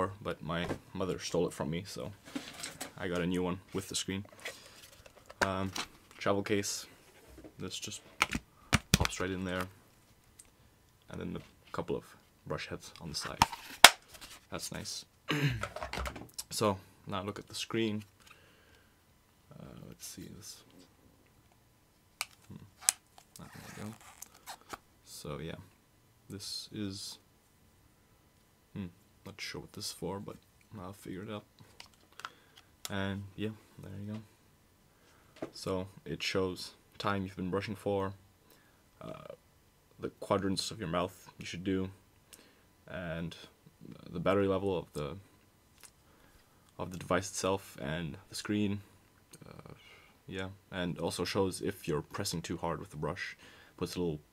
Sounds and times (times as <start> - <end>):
Speech: 0.0 - 2.2, 2.9 - 4.3, 5.4 - 7.0, 7.6 - 8.0, 9.1 - 9.8, 11.1 - 13.4, 14.5 - 15.1, 16.4 - 18.1, 19.5 - 20.7, 25.0 - 25.7, 26.3 - 27.2, 28.7 - 31.5, 32.9 - 34.3, 35.5 - 38.2, 39.0 - 39.4, 40.0 - 42.0, 42.9 - 45.3, 46.8 - 54.3.